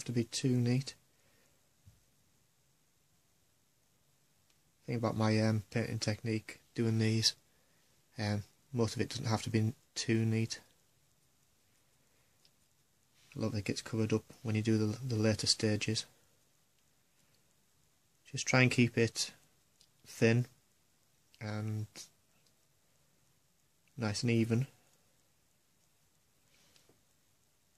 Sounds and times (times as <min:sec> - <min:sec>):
Speech: 0:00.0 - 0:01.0, 0:04.8 - 0:07.4, 0:08.2 - 0:10.8, 0:13.3 - 0:16.2, 0:18.2 - 0:19.4, 0:20.1 - 0:20.6, 0:21.4 - 0:22.2, 0:23.9 - 0:24.8.